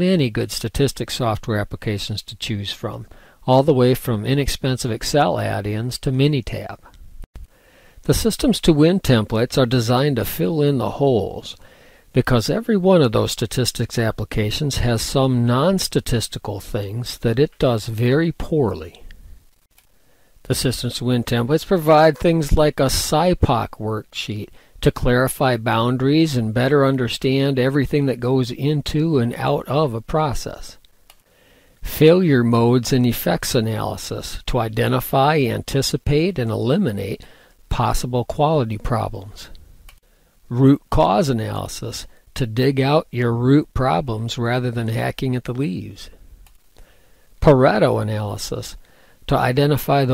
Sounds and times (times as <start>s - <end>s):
Speech: 0.0s - 6.9s, 8.0s - 19.1s, 20.4s - 30.8s, 31.8s - 39.6s, 40.5s - 46.2s, 47.4s - 50.1s.